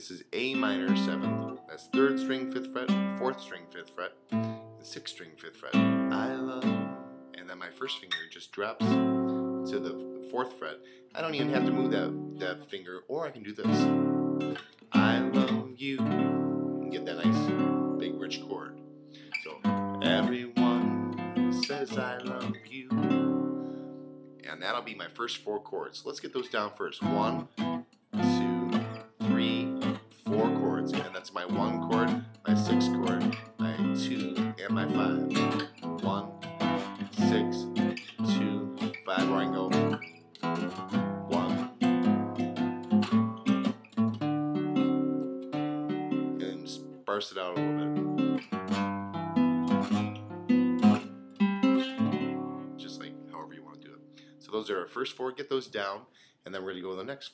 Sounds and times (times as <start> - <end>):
Strum: 0.0 - 12.8, 13.5 - 25.4, 26.4 - 54.8.